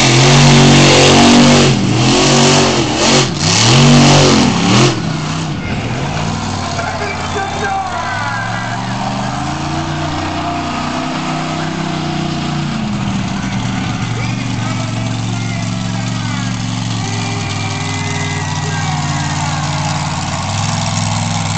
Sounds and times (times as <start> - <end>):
Truck: 0.0 - 21.5
Speech: 6.8 - 8.8, 13.4 - 19.8.